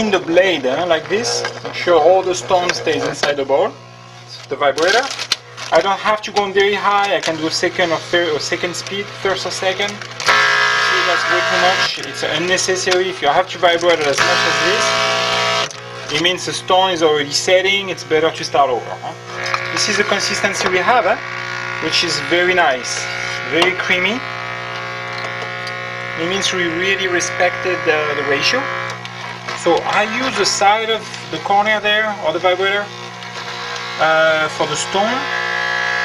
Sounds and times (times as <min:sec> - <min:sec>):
Speech: 0:00.0 - 0:10.0, 0:10.8 - 0:15.0, 0:16.1 - 0:21.2, 0:21.8 - 0:24.3, 0:26.2 - 0:28.7, 0:29.6 - 0:32.9, 0:34.0 - 0:35.3.